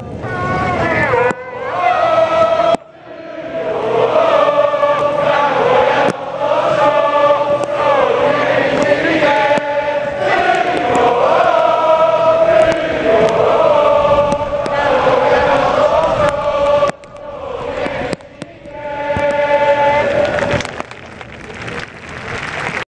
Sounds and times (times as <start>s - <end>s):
Mantra: 0.7s - 20.8s.